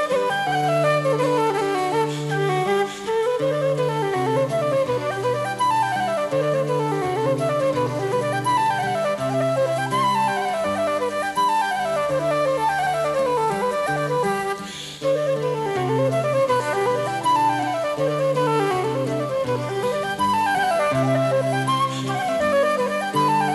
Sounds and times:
Flute: 0.0s - 23.5s.

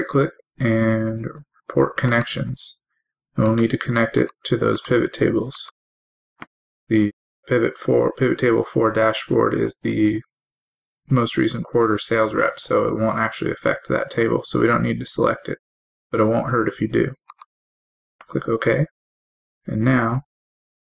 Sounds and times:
Speech: 0.0s - 2.8s, 3.4s - 5.8s, 6.9s - 10.3s, 11.1s - 15.6s, 16.2s - 17.4s, 18.2s - 18.9s, 19.7s - 20.3s.

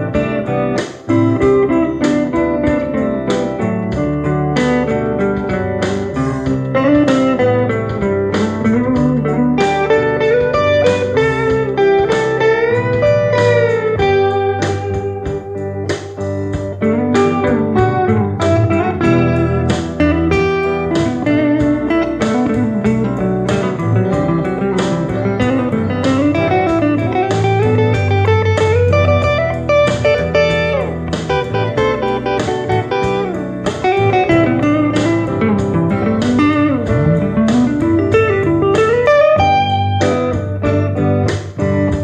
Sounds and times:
Electric guitar: 0.0s - 42.0s
Steel guitar, slide guitar: 0.0s - 42.0s.

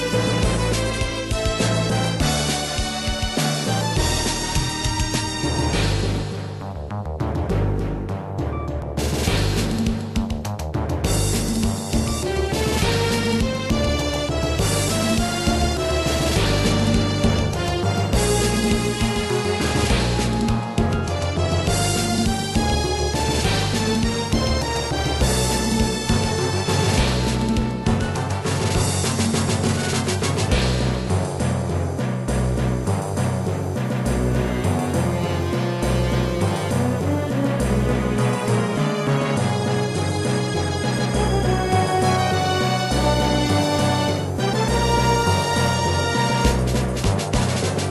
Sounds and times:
Music: 0.0s - 47.9s.

